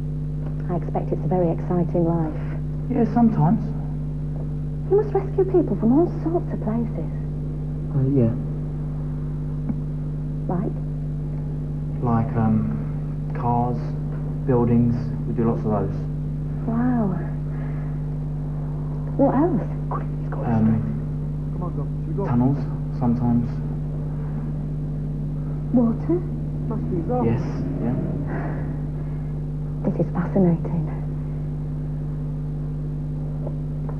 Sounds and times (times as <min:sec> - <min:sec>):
Speech: 0:00.6 - 0:03.8, 0:04.9 - 0:07.1, 0:07.9 - 0:08.5, 0:10.5 - 0:10.7, 0:12.0 - 0:16.1, 0:19.2 - 0:21.0, 0:21.6 - 0:23.6, 0:25.7 - 0:28.4, 0:29.9 - 0:31.0.